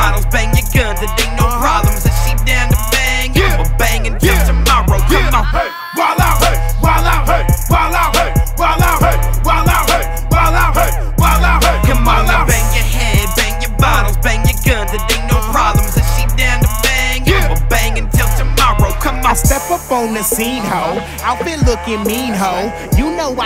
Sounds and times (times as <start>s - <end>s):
Music: 0.0s - 23.4s.